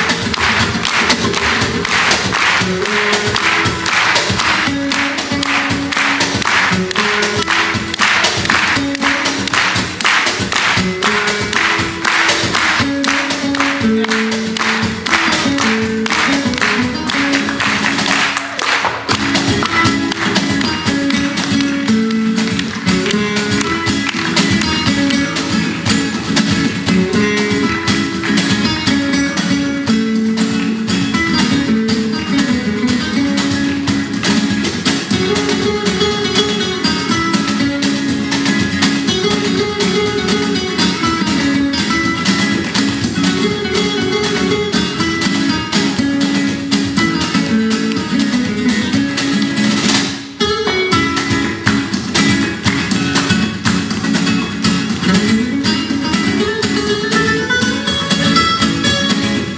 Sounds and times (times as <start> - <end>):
Strum: 0.0 - 59.5.